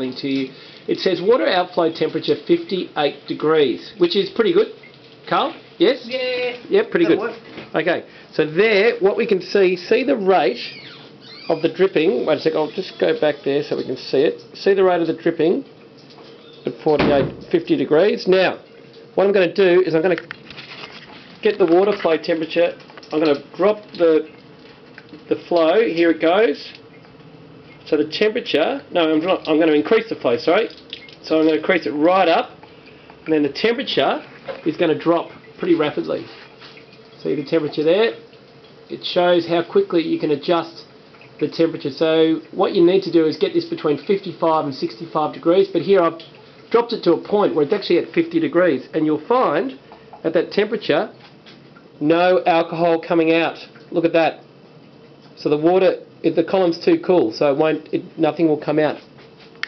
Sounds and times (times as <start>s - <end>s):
Speech: 0.0s - 10.8s, 11.4s - 15.7s, 16.7s - 18.6s, 19.2s - 20.3s, 21.4s - 24.3s, 25.2s - 26.8s, 27.9s - 32.6s, 33.3s - 36.4s, 37.2s - 38.2s, 38.9s - 51.2s, 52.0s - 54.4s, 55.4s - 59.1s.